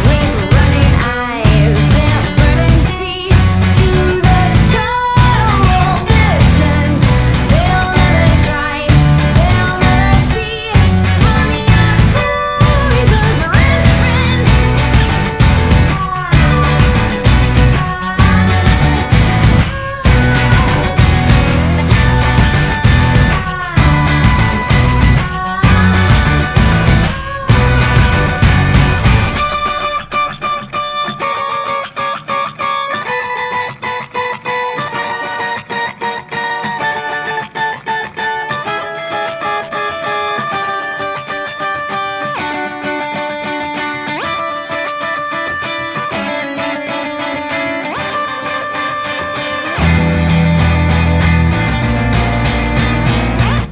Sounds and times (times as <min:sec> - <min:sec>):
Distortion: 0:00.0 - 0:53.7
Electric guitar: 0:00.0 - 0:53.7.